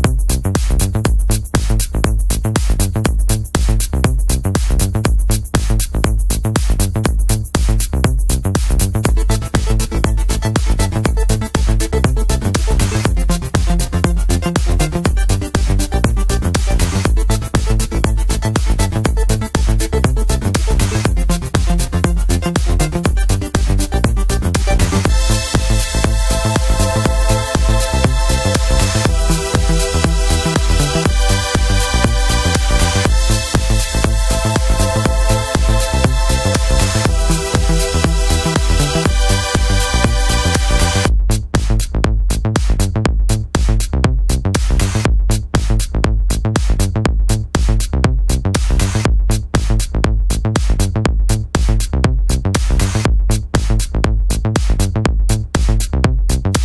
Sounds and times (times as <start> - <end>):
Disco: 0.0 - 56.6.